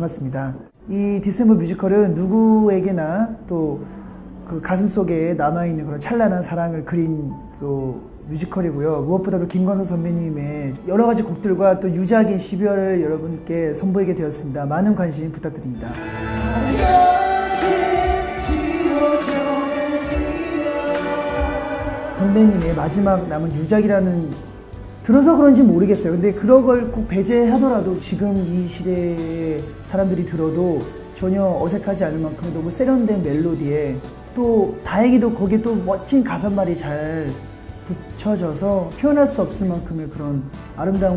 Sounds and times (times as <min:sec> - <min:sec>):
Speech: 0:00.0 - 0:16.0, 0:22.2 - 0:24.4, 0:25.0 - 0:41.1
Music: 0:00.0 - 0:41.1.